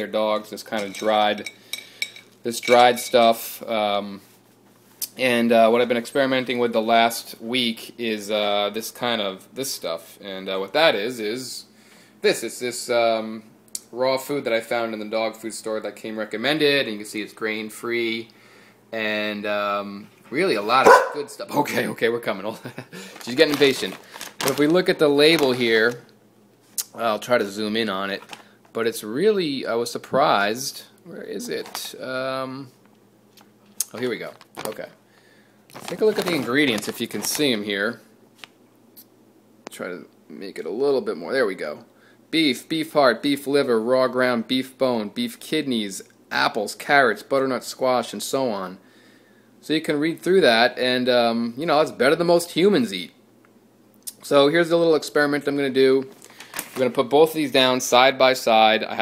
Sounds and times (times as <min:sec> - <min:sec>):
Speech: 0:00.0 - 0:01.5, 0:02.4 - 0:04.3, 0:05.0 - 0:18.3, 0:18.9 - 0:26.1, 0:26.8 - 0:32.8, 0:33.8 - 0:35.0, 0:35.8 - 0:38.1, 0:39.7 - 0:48.8, 0:49.6 - 0:53.2, 0:54.1 - 0:56.2, 0:56.8 - 0:59.0.